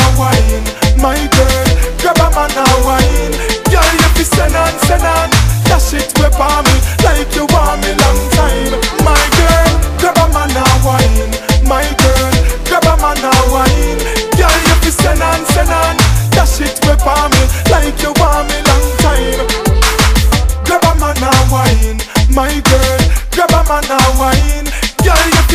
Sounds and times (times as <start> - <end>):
Afrobeat: 0.0 - 25.5.